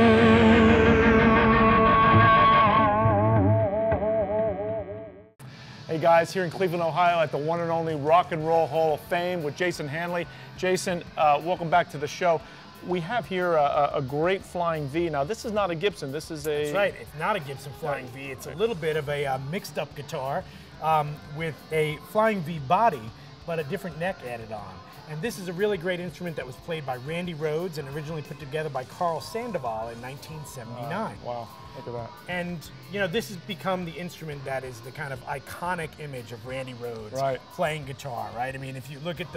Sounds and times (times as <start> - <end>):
Speech: 5.9 - 39.3.